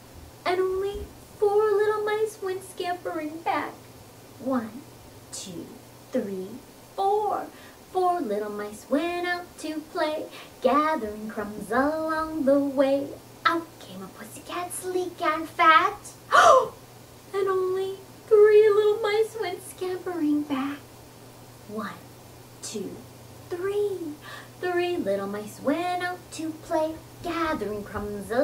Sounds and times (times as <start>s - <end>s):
Speech: 4.4s - 7.5s, 21.7s - 22.0s, 22.6s - 24.2s.